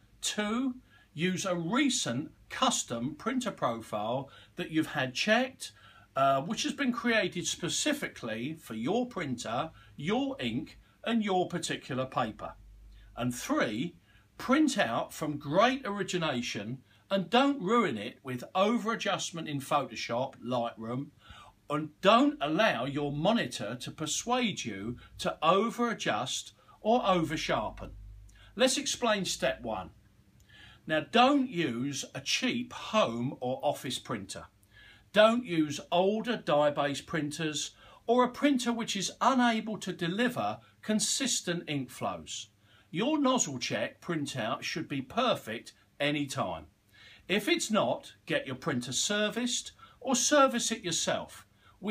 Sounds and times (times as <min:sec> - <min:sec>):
Speech: 0:00.0 - 0:12.6, 0:13.2 - 0:21.1, 0:21.7 - 0:28.0, 0:28.6 - 0:30.0, 0:30.9 - 0:46.7, 0:47.3 - 0:51.9.